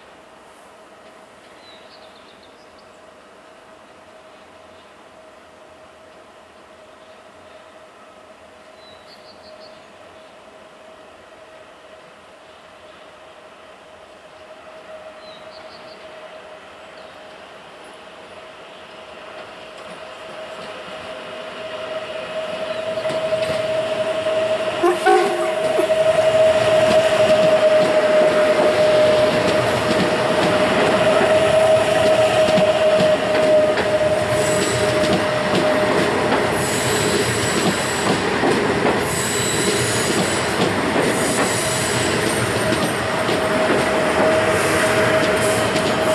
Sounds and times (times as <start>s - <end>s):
Railroad car, train wagon: 0.0s - 46.1s
Train: 0.0s - 46.1s
Clickety-clack: 19.4s - 21.0s, 23.0s - 23.7s, 26.7s - 46.1s.